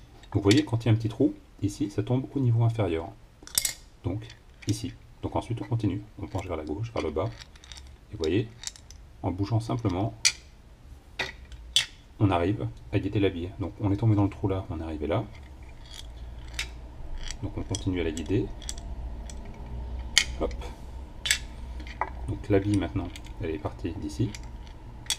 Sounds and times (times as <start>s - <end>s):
Speech: 0.3s - 3.2s, 4.1s - 7.4s, 8.1s - 8.5s, 9.2s - 10.2s, 12.2s - 15.3s, 17.4s - 18.5s, 20.4s - 20.8s, 22.3s - 24.4s.